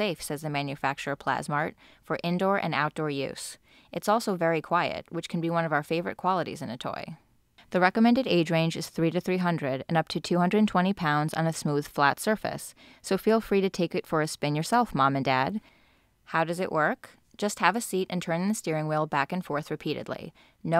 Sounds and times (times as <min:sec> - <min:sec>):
Speech: 0:00.0 - 0:15.6, 0:16.3 - 0:20.7.